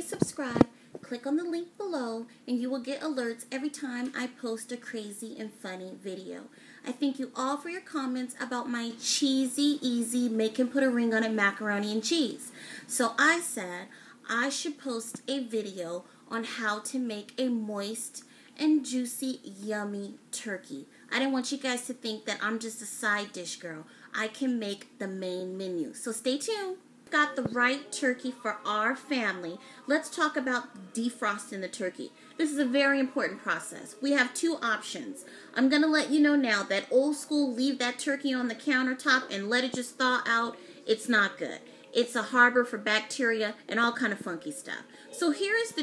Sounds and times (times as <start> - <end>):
Speech: 0.0 - 45.8.